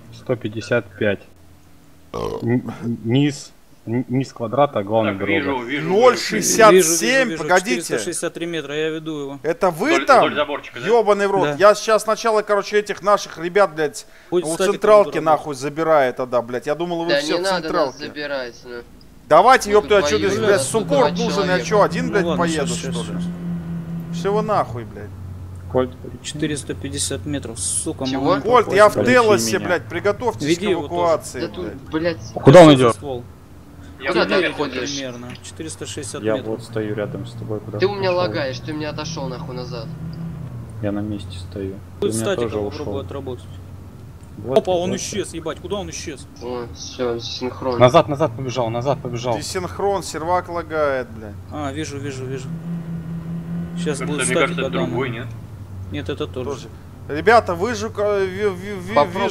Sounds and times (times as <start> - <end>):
Speech: 2.2 - 23.3, 24.2 - 25.1, 25.7 - 33.2, 44.4 - 52.5, 53.8 - 55.3, 55.9 - 59.3.